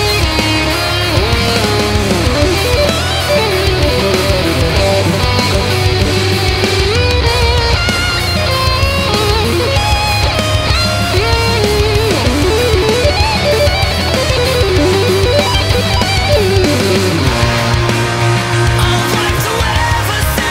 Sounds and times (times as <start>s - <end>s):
Guitar: 0.0s - 20.5s.